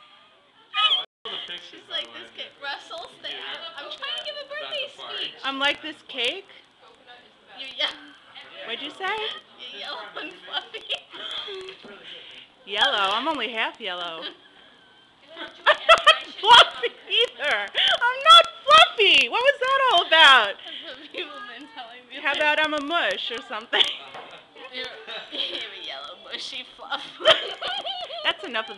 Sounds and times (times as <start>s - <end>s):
Conversation: 0.7s - 28.7s
Female speech, woman speaking: 1.8s - 11.1s, 12.7s - 14.4s, 15.2s - 23.9s, 24.6s - 28.7s.